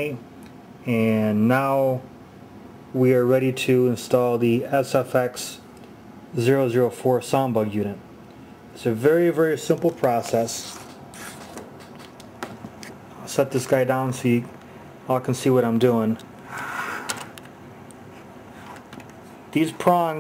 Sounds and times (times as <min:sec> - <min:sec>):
Speech: 0:00.0 - 0:00.2, 0:00.8 - 0:02.1, 0:02.9 - 0:05.7, 0:06.4 - 0:08.0, 0:08.8 - 0:10.8, 0:13.2 - 0:14.5, 0:15.1 - 0:16.2, 0:19.5 - 0:20.2.